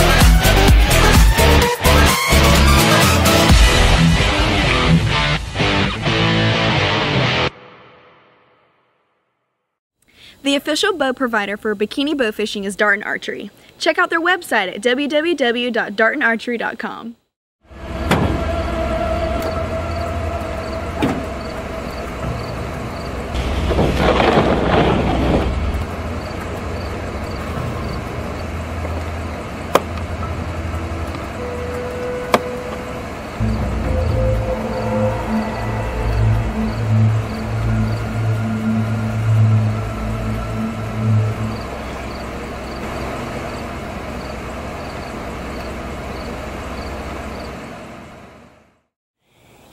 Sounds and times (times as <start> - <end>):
Music: 0.0 - 9.8, 30.2 - 42.7
Speech: 10.4 - 17.2.